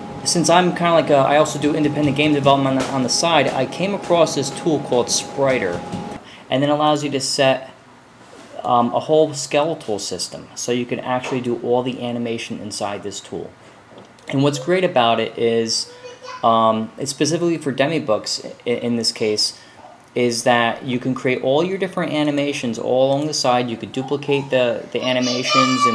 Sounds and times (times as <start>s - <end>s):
Speech: 0.3s - 5.8s, 6.5s - 7.8s, 8.6s - 13.6s, 14.3s - 19.6s, 20.2s - 25.9s.